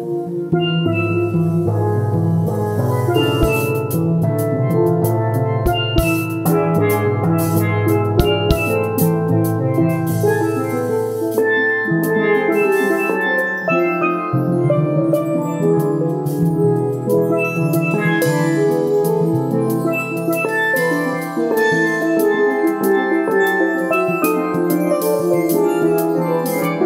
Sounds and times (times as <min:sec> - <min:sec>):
Steelpan: 0:03.1 - 0:04.2, 0:05.7 - 0:13.4
Drum: 0:03.2 - 0:03.9, 0:05.7 - 0:06.5, 0:08.2 - 0:08.9
Drum kit: 0:03.2 - 0:04.4, 0:05.7 - 0:11.4.